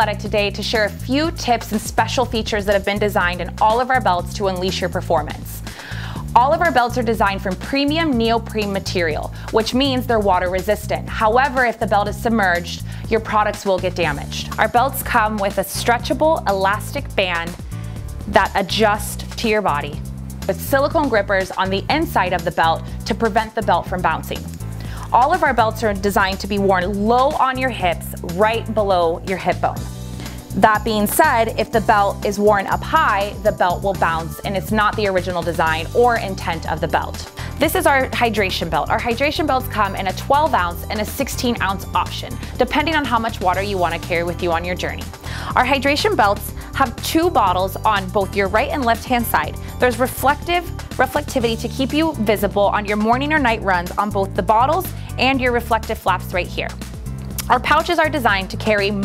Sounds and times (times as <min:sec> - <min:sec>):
Speech: 0:00.0 - 0:05.6, 0:06.2 - 0:17.6, 0:18.3 - 0:24.4, 0:25.1 - 0:29.8, 0:30.6 - 0:56.8, 0:57.4 - 0:59.0
Music: 0:00.0 - 0:59.0.